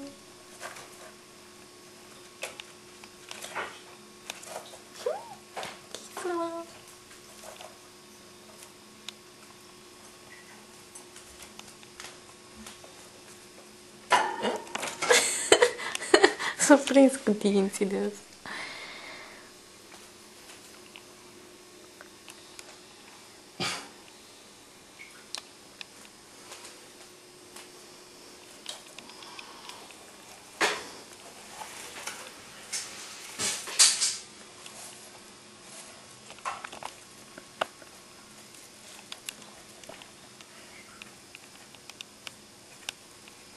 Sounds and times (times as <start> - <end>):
Speech: 6.0 - 6.8, 16.6 - 18.2.